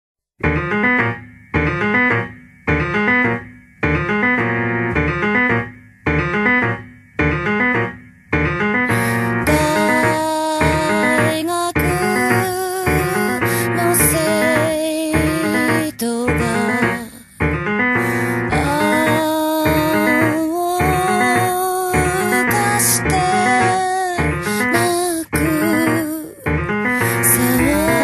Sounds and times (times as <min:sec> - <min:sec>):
Electric piano: 0:00.4 - 0:28.0.